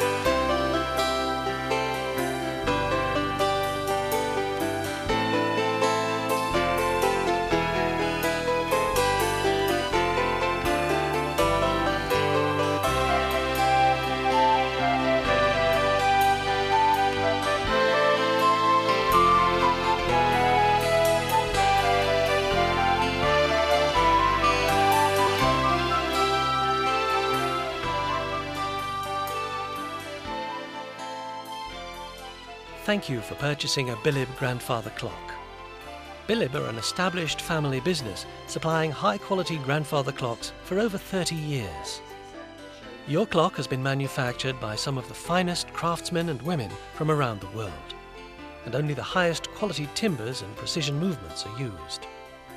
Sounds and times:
Music: 0.0s - 52.5s.

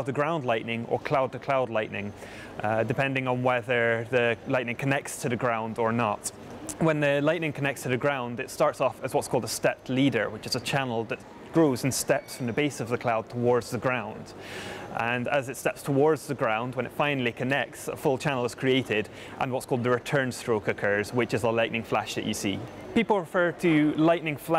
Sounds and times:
Speech: 0.0s - 14.4s, 15.0s - 24.5s.

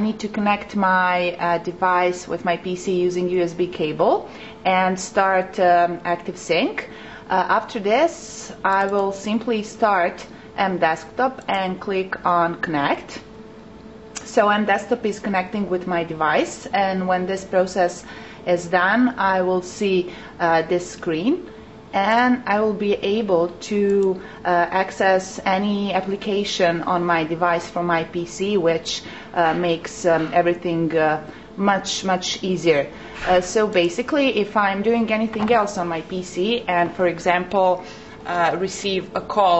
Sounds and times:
Speech: 0.0s - 13.3s, 14.2s - 39.5s.

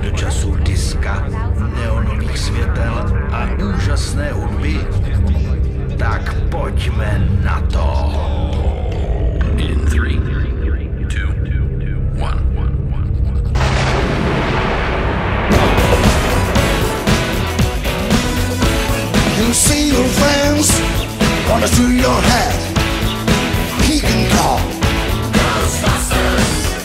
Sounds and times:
Jazz: 15.5s - 26.8s
Jingle (music): 15.5s - 26.8s
Pop music: 15.5s - 26.8s.

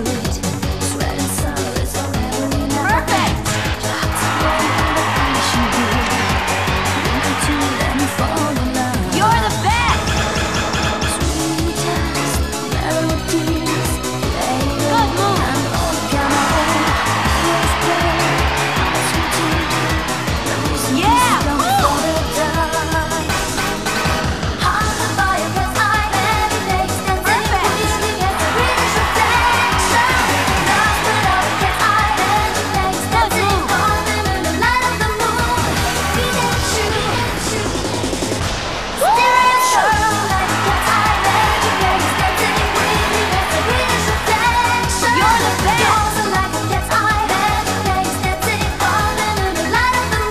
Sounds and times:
Music: 0.0s - 50.3s.

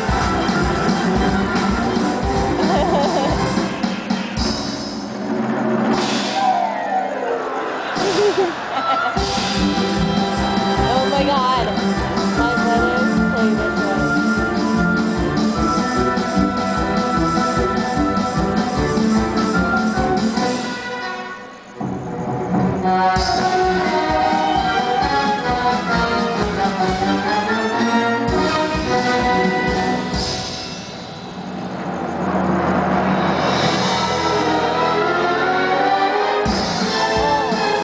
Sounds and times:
Music: 0.0s - 37.8s.

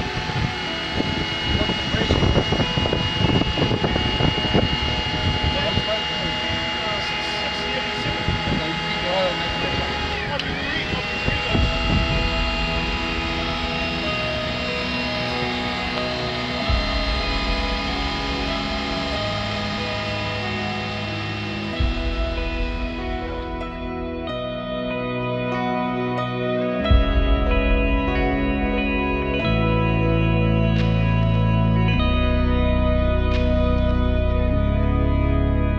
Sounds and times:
Music: 0.0s - 35.7s
Speech: 1.8s - 2.8s, 5.1s - 12.0s.

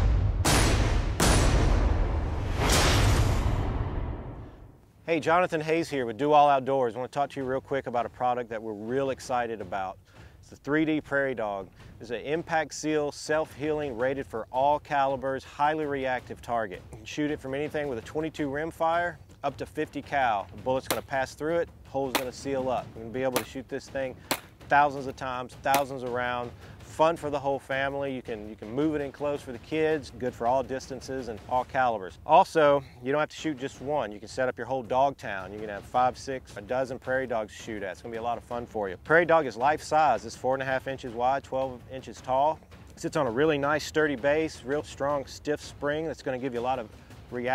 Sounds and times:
Speech: 5.0s - 47.5s.

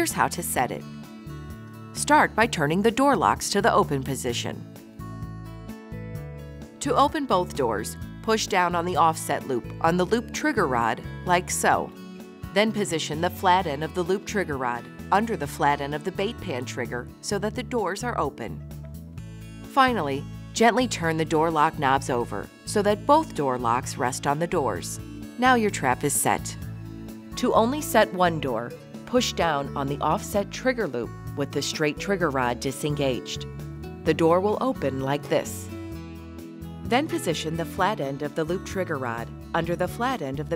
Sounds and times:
Speech: 0.0s - 0.8s, 2.0s - 4.6s, 6.8s - 11.9s, 12.5s - 18.6s, 19.8s - 26.6s, 27.4s - 33.4s, 34.1s - 35.7s, 36.9s - 40.5s
Music: 0.0s - 40.5s.

